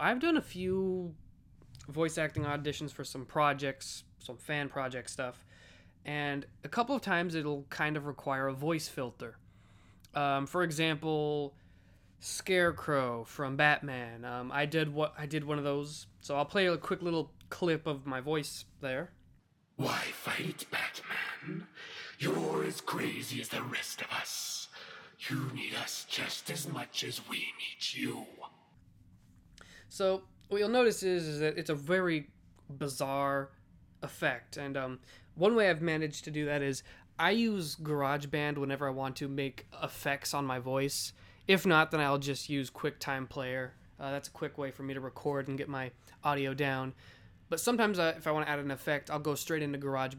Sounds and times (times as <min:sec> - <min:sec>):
Speech: 0:00.0 - 0:01.2, 0:01.8 - 0:05.4, 0:06.1 - 0:09.4, 0:10.1 - 0:11.6, 0:12.2 - 0:19.2, 0:19.8 - 0:28.7, 0:29.9 - 0:50.1.